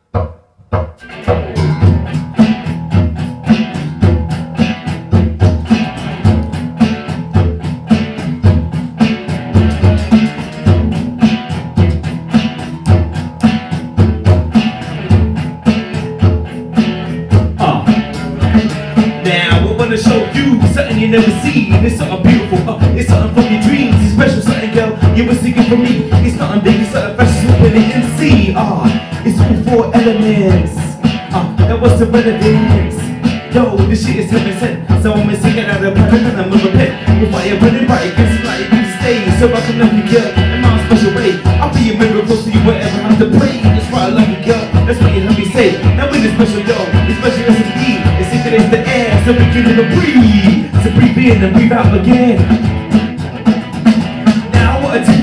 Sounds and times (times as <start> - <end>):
Bass guitar: 0.0 - 55.2.